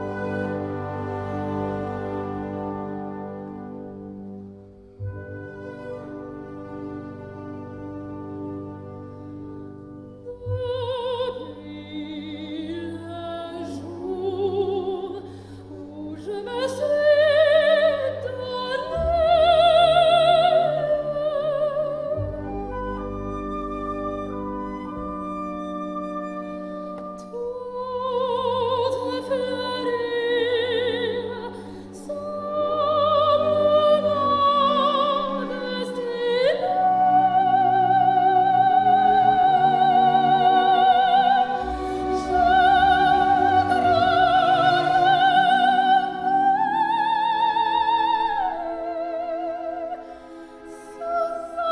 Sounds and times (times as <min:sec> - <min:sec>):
Music: 0:00.0 - 0:51.7.